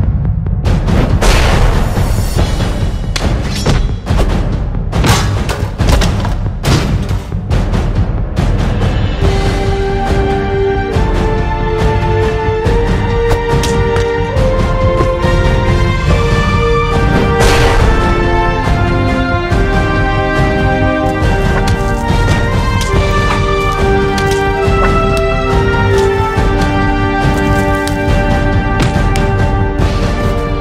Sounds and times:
Theme music: 9.0 - 30.6.

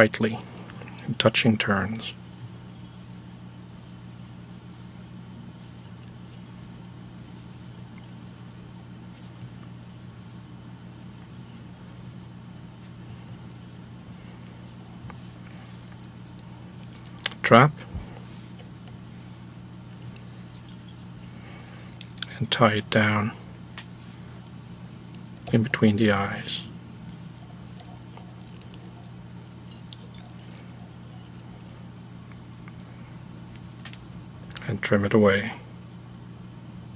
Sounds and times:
Speech: 0.0 - 2.2, 17.4 - 17.9, 22.3 - 23.4, 25.5 - 26.7, 34.6 - 35.7.

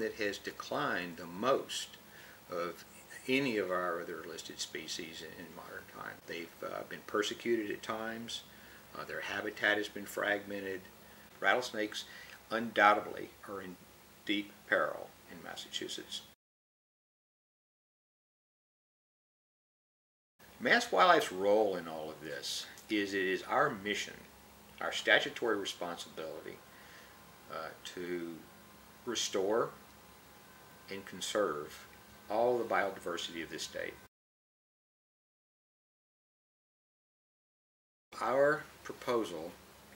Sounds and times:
Speech: 0.0 - 16.4, 20.6 - 26.6, 27.5 - 28.5, 29.1 - 29.8, 30.9 - 34.1, 38.2 - 39.6.

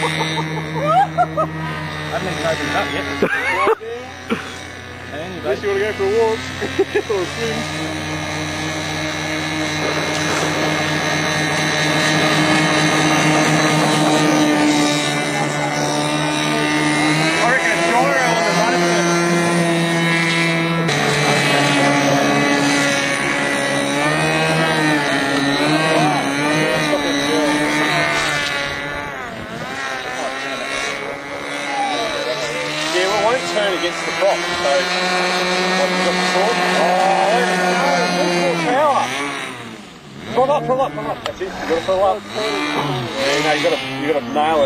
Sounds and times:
Motorboat, speedboat: 0.0 - 44.6.

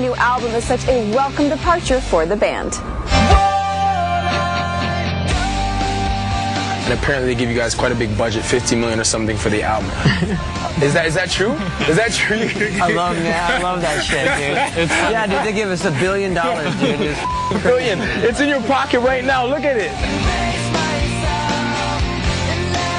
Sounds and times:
Music: 0.0 - 22.9.

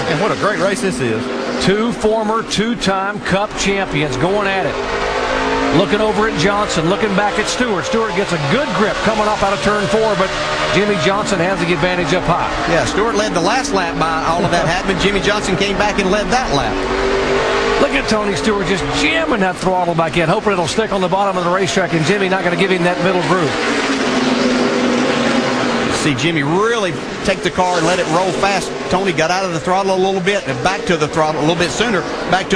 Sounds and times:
Speech: 0.0 - 4.8, 5.7 - 16.8, 17.8 - 23.6, 25.9 - 32.5.

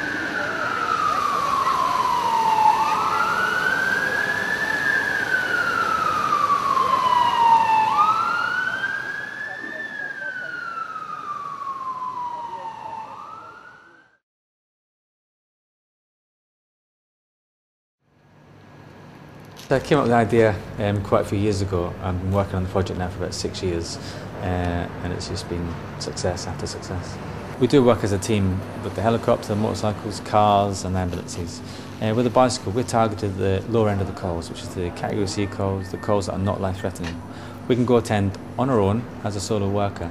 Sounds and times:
Police car (siren): 0.0 - 14.2.

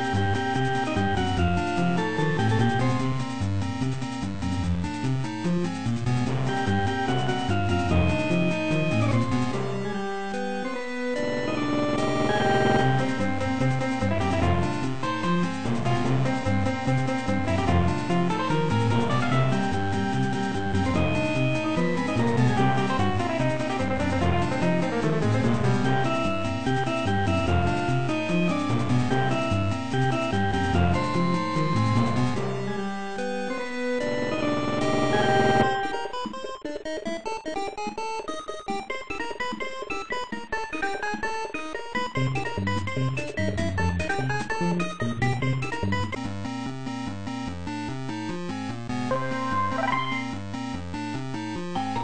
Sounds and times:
Video game music: 0.0 - 52.0.

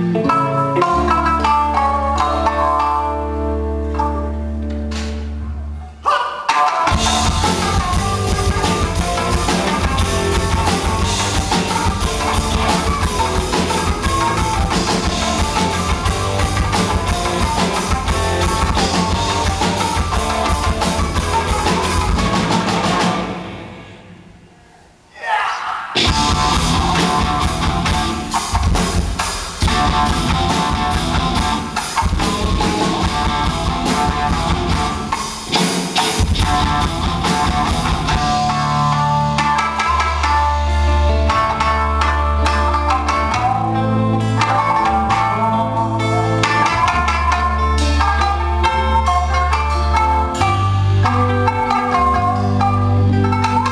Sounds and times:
Rock and roll: 0.0 - 24.1, 25.3 - 53.7
Progressive rock: 0.0 - 53.7.

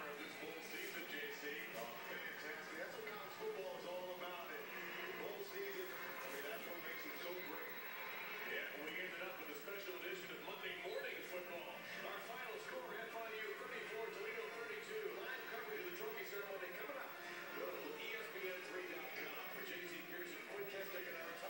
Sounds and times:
Speech: 0.0 - 7.8, 8.5 - 21.5
Music: 0.0 - 21.5.

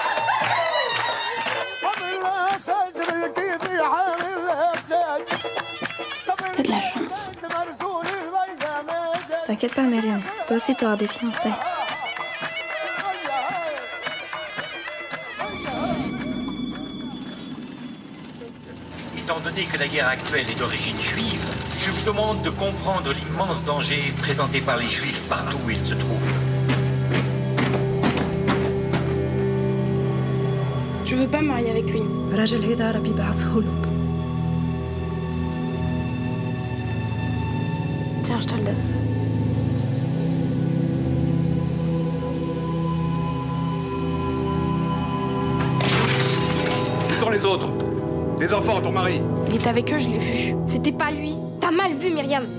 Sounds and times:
Music: 0.0 - 52.5.

